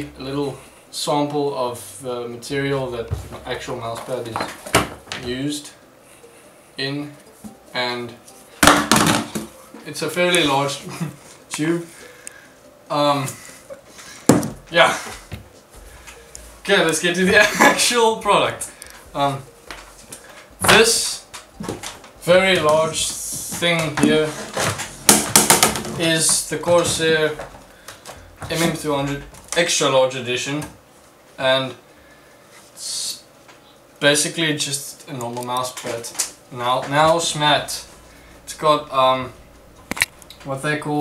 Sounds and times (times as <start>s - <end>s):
Speech: 0.0s - 4.5s, 5.2s - 5.8s, 6.8s - 7.2s, 7.8s - 8.2s, 9.8s - 10.9s, 11.6s - 11.9s, 12.9s - 13.4s, 16.6s - 19.5s, 20.6s - 21.2s, 22.2s - 24.5s, 25.9s - 27.4s, 28.4s - 30.7s, 31.4s - 31.8s, 32.8s - 33.2s, 34.0s - 37.9s, 38.5s - 39.4s, 40.4s - 41.0s
Inside, small room: 0.0s - 41.0s.